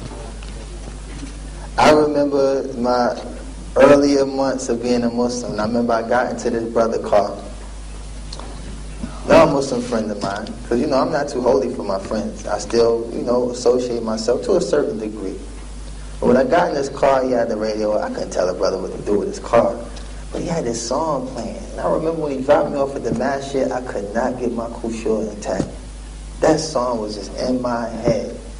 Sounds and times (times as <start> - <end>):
Speech: 1.8 - 7.6, 9.0 - 15.5, 16.2 - 25.8, 26.4 - 28.5.